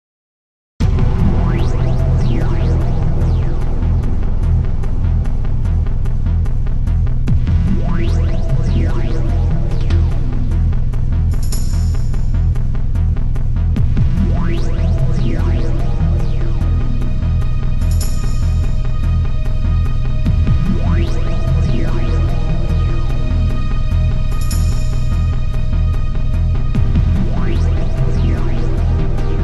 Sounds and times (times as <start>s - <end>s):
Music: 0.8s - 29.4s.